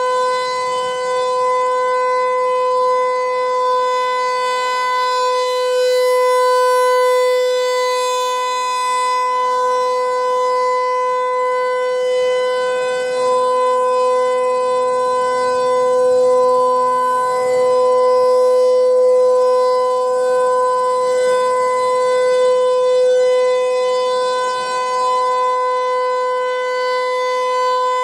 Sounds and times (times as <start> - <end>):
Civil defense siren: 0.0 - 28.0.